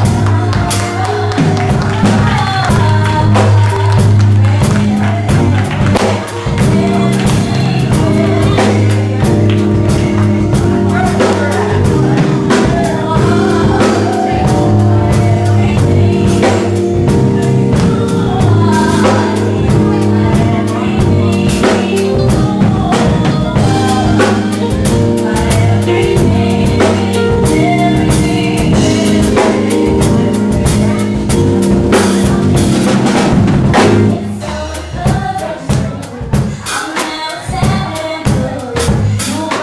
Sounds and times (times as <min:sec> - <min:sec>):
Female singing: 0:00.0 - 0:39.6
Music: 0:00.0 - 0:39.6.